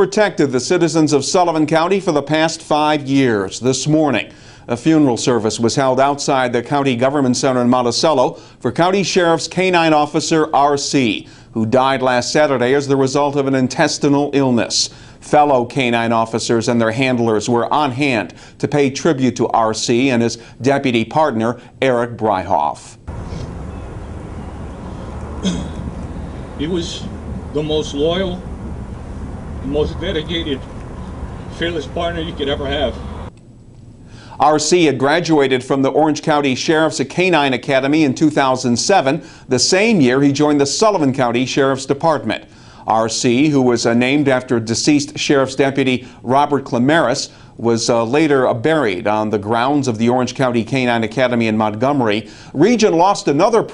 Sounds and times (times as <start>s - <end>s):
Speech: 0.0s - 23.0s, 26.6s - 28.5s, 29.6s - 30.6s, 31.5s - 33.0s, 34.4s - 53.7s.